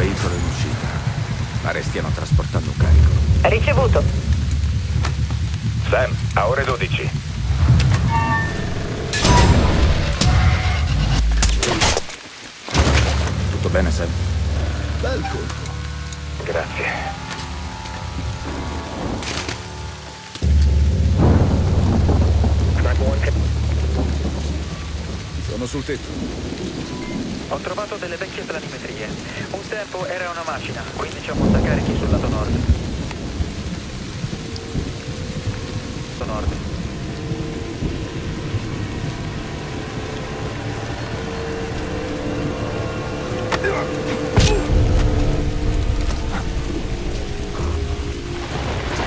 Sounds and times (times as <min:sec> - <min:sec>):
Thunder: 0:00.0 - 0:12.0, 0:20.4 - 0:27.6, 0:31.0 - 0:41.0, 0:44.3 - 0:49.0
Rain on surface: 0:00.0 - 0:49.0.